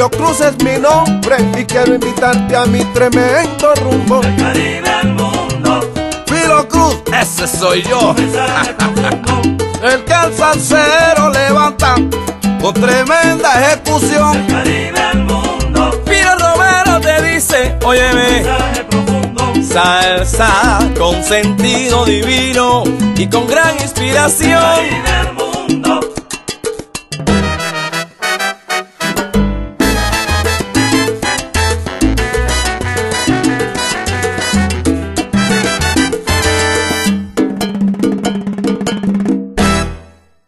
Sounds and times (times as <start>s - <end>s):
Music of Latin America: 0.0s - 40.4s.